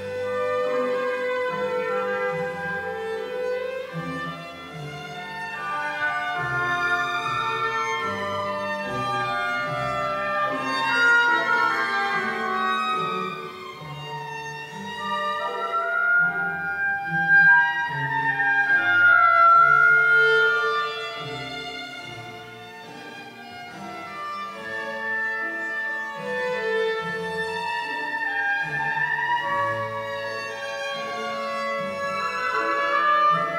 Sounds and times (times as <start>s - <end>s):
Violin, fiddle: 0.0s - 33.5s.